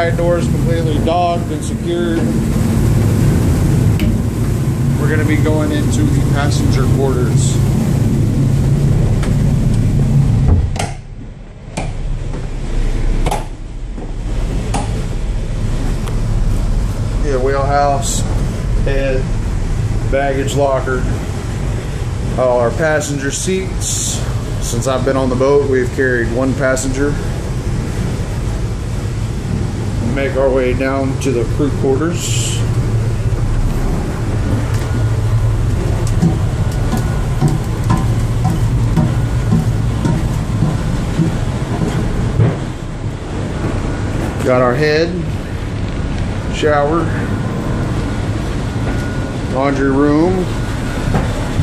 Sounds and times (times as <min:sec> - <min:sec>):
Speech: 0:00.0 - 0:02.3, 0:05.0 - 0:07.6, 0:17.2 - 0:19.3, 0:20.1 - 0:21.2, 0:22.4 - 0:27.3, 0:30.0 - 0:32.7, 0:44.4 - 0:45.4, 0:46.5 - 0:47.3, 0:49.5 - 0:50.5.